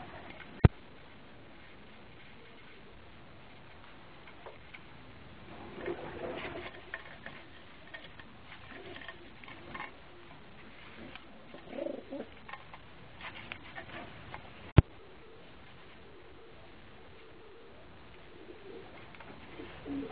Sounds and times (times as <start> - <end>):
Coo: 5.5 - 12.5, 14.9 - 20.1.